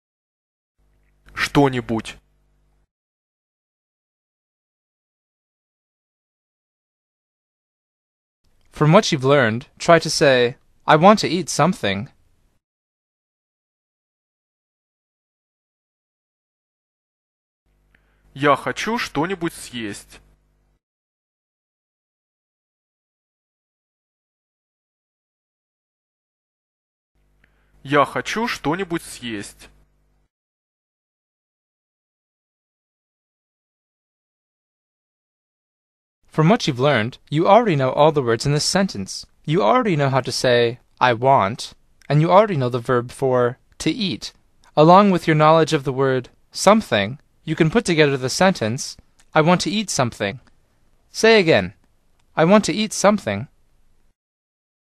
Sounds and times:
Speech synthesizer: 0:01.4 - 0:02.2, 0:08.8 - 0:12.1, 0:18.4 - 0:20.2, 0:27.9 - 0:29.7, 0:36.4 - 0:50.4, 0:52.4 - 0:53.5.

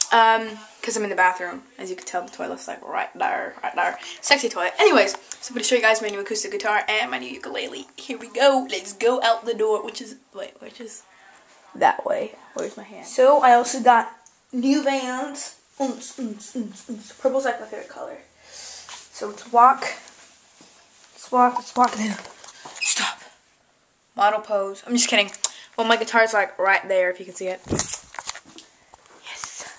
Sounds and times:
Speech: 0:00.0 - 0:18.3, 0:21.2 - 0:22.3, 0:24.2 - 0:27.7.

